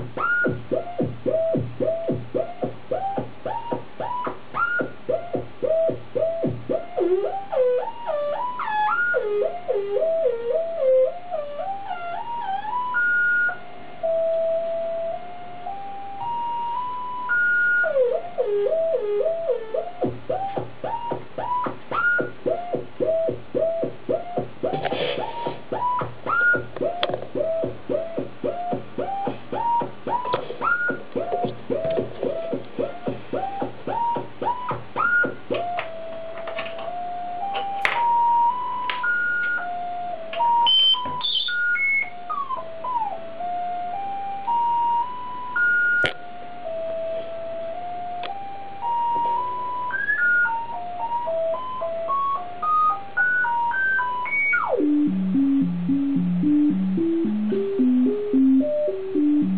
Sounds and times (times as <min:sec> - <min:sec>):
Synthesizer: 0:00.0 - 0:59.5.